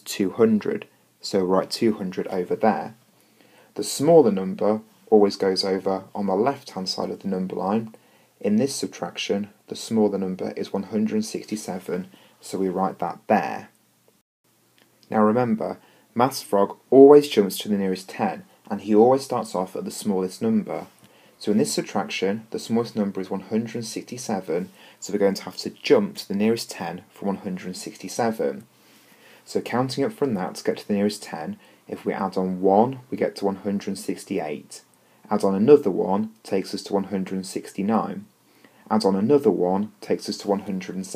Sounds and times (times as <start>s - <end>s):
Speech: 0.0s - 3.0s, 3.8s - 13.8s, 15.0s - 28.7s, 29.4s - 41.1s.